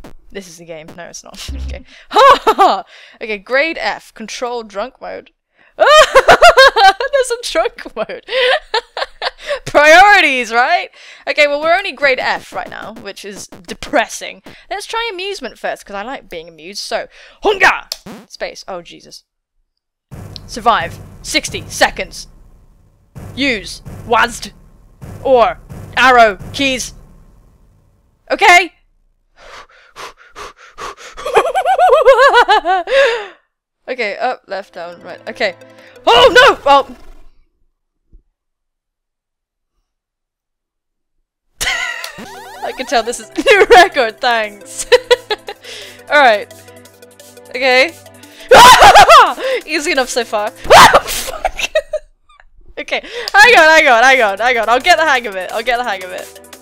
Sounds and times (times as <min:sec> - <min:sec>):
Speech: 0:00.3 - 0:05.3, 0:07.1 - 0:08.2, 0:09.7 - 0:19.2, 0:20.5 - 0:22.3, 0:23.4 - 0:24.5, 0:25.2 - 0:26.9, 0:28.3 - 0:28.7, 0:33.9 - 0:37.0, 0:42.6 - 0:44.6, 0:46.1 - 0:46.5, 0:47.5 - 0:48.0, 0:48.8 - 0:50.5, 0:52.8 - 0:56.2
Music: 0:34.5 - 0:36.8, 0:42.2 - 0:50.9, 0:53.4 - 0:56.6.